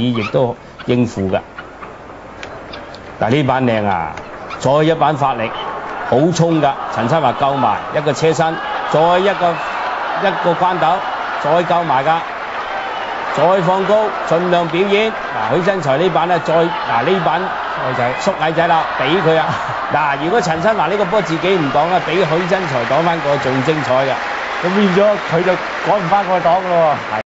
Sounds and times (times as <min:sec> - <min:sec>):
Speech: 0:00.0 - 0:01.4, 0:03.2 - 0:09.6, 0:10.2 - 0:12.2, 0:13.4 - 0:27.2.